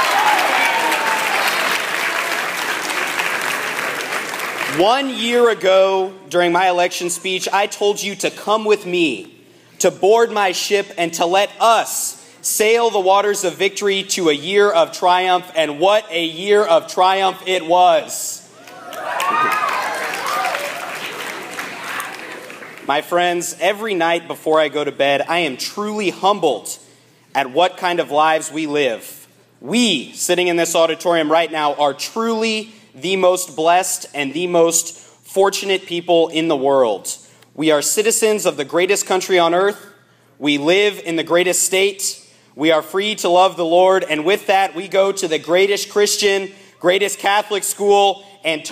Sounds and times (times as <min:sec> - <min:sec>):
Narration, monologue: 0:04.6 - 0:18.7, 0:22.7 - 0:48.7
Male speech, man speaking: 0:04.7 - 0:18.5, 0:22.9 - 0:26.8, 0:27.4 - 0:48.7.